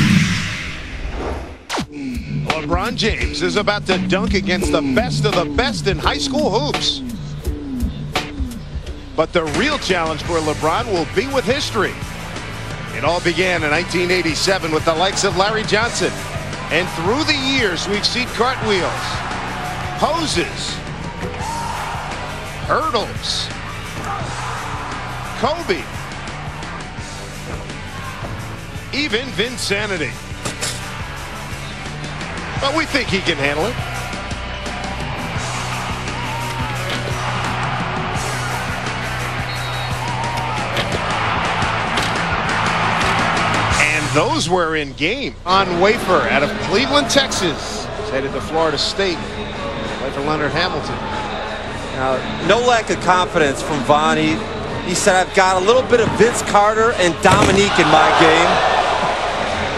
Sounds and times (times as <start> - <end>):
Music: 0.0 - 59.7
Speech: 2.0 - 7.0, 9.2 - 12.0, 13.0 - 19.2, 20.0 - 20.8, 22.7 - 23.5, 25.4 - 25.8, 29.0 - 30.2, 32.6 - 33.8, 43.8 - 49.4, 50.0 - 51.1, 51.9 - 58.6.